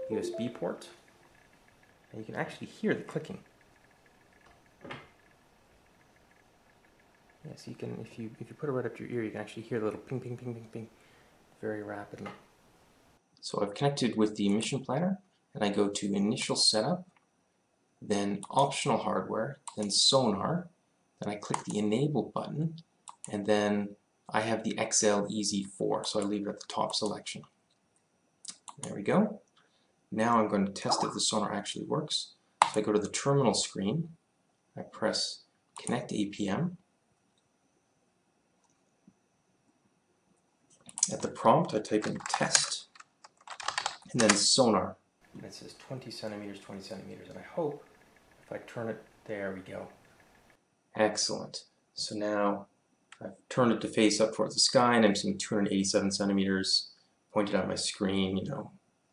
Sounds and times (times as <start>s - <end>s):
Speech: 0.0s - 1.0s, 2.1s - 3.5s, 7.4s - 11.0s, 11.6s - 12.4s, 13.4s - 17.1s, 18.0s - 27.5s, 28.5s - 29.4s, 30.1s - 34.2s, 34.8s - 36.8s, 41.0s - 42.9s, 44.1s - 47.9s, 48.5s - 50.0s, 51.0s - 58.8s
Typing: 42.0s - 44.4s.